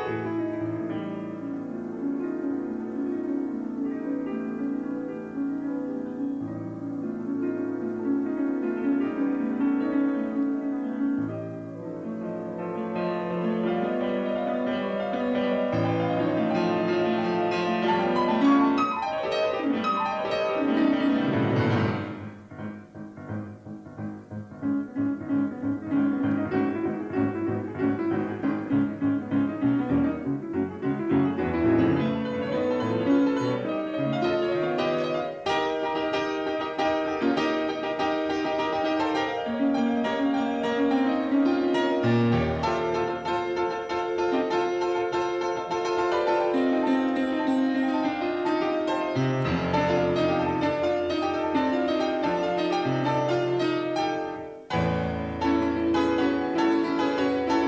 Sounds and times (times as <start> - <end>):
Piano: 0.0 - 57.6.